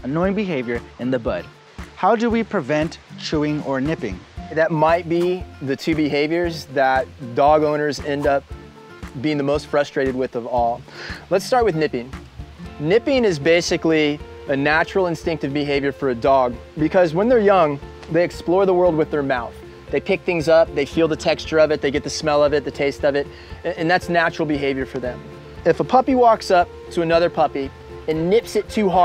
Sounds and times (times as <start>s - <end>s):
Speech: 0.0s - 8.4s, 9.2s - 12.2s, 12.8s - 29.0s
Music: 0.0s - 29.0s.